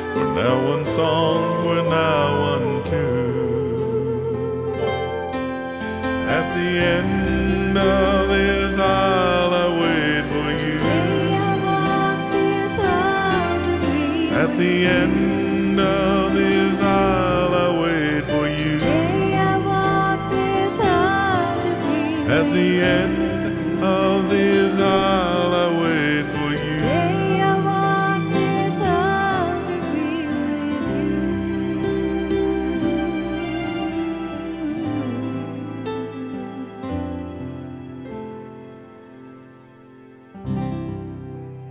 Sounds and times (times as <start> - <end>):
Wedding music: 0.0 - 41.7.